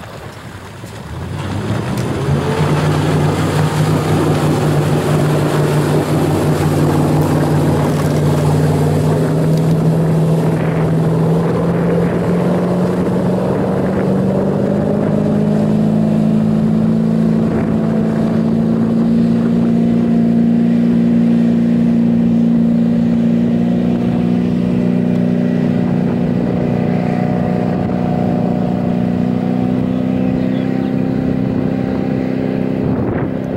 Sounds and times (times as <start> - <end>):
Sailboat, sailing ship: 0.0 - 33.5.